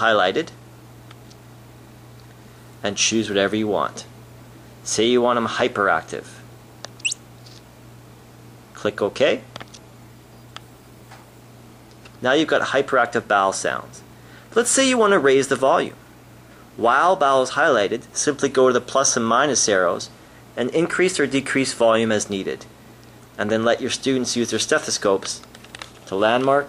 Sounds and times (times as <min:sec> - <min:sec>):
Speech: 0:00.0 - 0:00.6, 0:02.8 - 0:04.1, 0:04.8 - 0:06.5, 0:08.7 - 0:09.6, 0:12.2 - 0:16.0, 0:16.8 - 0:22.7, 0:23.4 - 0:25.5, 0:26.1 - 0:26.6.